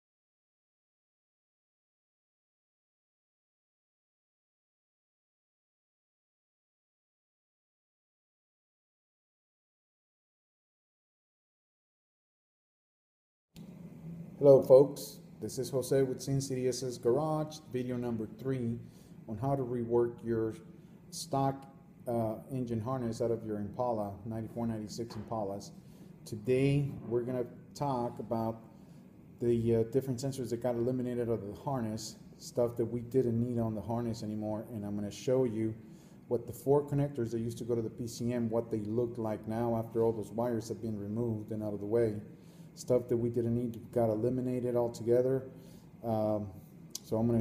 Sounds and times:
Speech: 14.4 - 28.7, 29.4 - 47.4.

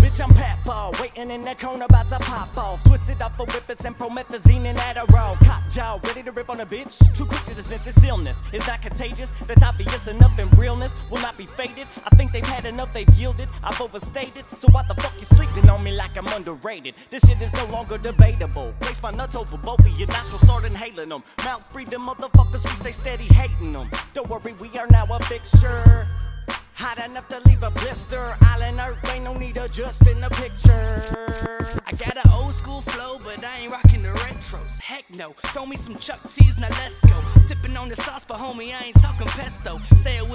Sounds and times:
Pop music: 0.0 - 40.3.

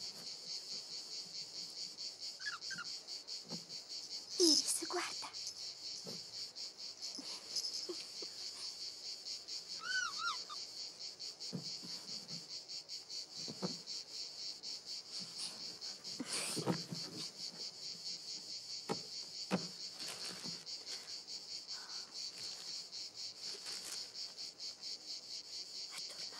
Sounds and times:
Speech: 4.4 - 5.4.

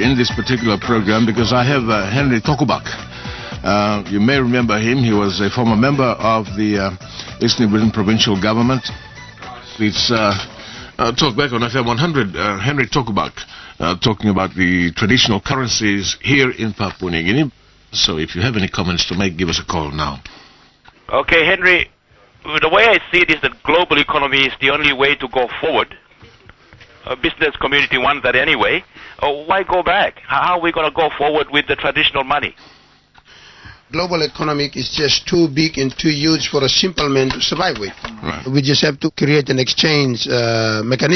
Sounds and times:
Speech: 0.0 - 3.0, 3.6 - 8.9, 9.5 - 20.3, 21.1 - 26.0, 27.0 - 32.6, 33.9 - 41.1.

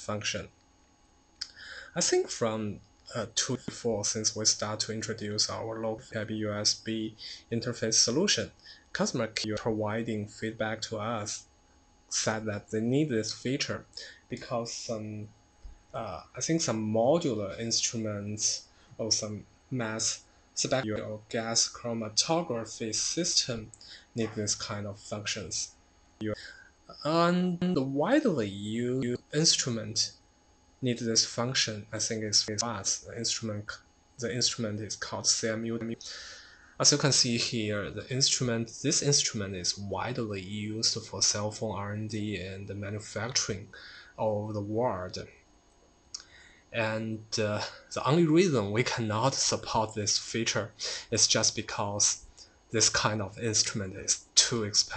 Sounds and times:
Speech: 0.0 - 0.5, 1.4 - 11.5, 12.1 - 15.3, 16.0 - 30.2, 30.8 - 45.4, 46.2 - 54.9.

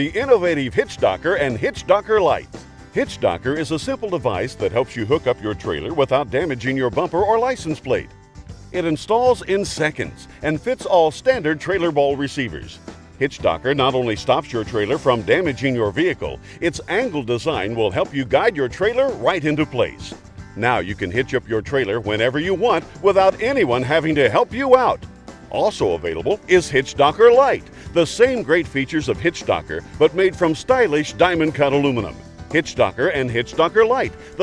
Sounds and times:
Speech: 0.0 - 2.4, 3.0 - 8.1, 8.8 - 34.4
Music: 0.0 - 34.4.

